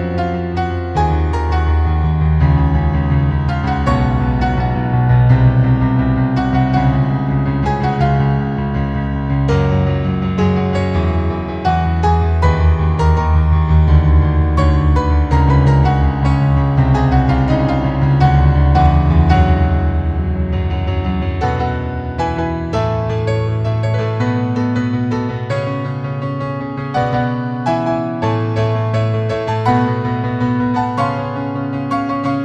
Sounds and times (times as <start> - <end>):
Music: 0.0 - 32.4.